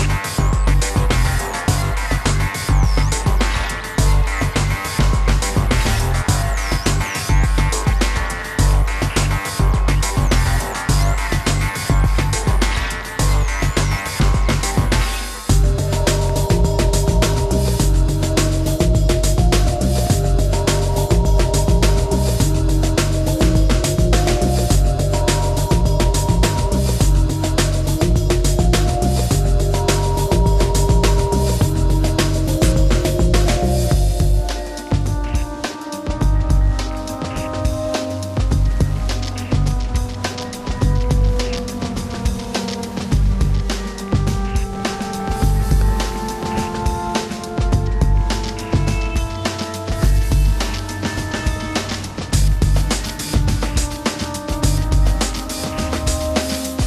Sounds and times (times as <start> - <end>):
Background music: 0.0 - 56.8
Soundtrack music: 0.0 - 56.8.